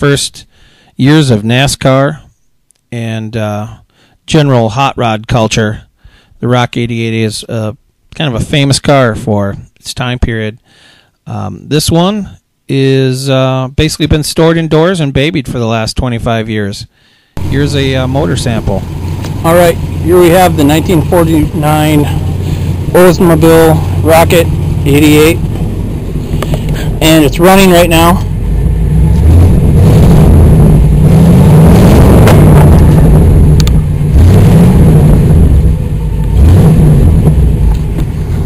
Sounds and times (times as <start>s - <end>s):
Speech: 0.0s - 2.3s, 2.9s - 10.6s, 11.3s - 18.8s, 19.4s - 22.2s, 22.9s - 25.4s, 27.0s - 28.3s
Car: 17.4s - 38.4s.